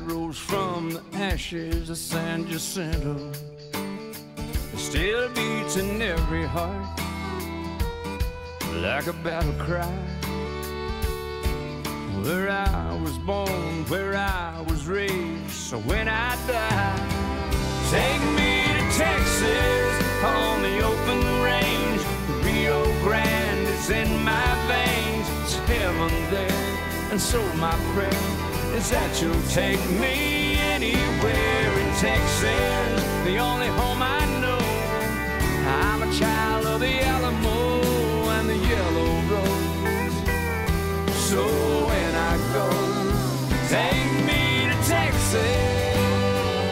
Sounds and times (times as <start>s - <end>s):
Music: 0.0s - 46.7s.